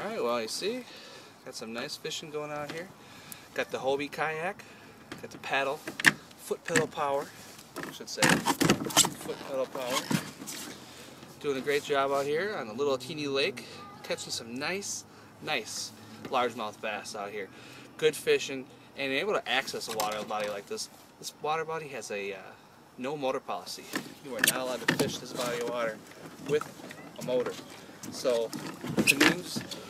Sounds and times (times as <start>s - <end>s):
Speech: 6.4s - 7.3s, 9.2s - 10.1s, 11.4s - 26.6s, 28.2s - 29.8s.